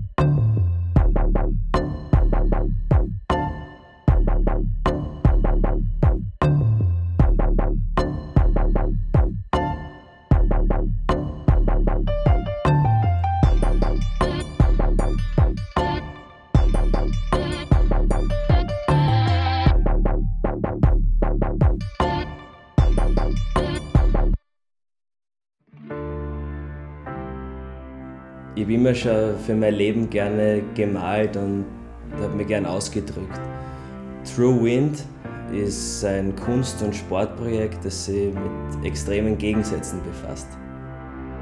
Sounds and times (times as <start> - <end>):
Music: 0.0 - 24.4, 25.6 - 41.4
Speech: 28.6 - 33.4, 34.3 - 40.6.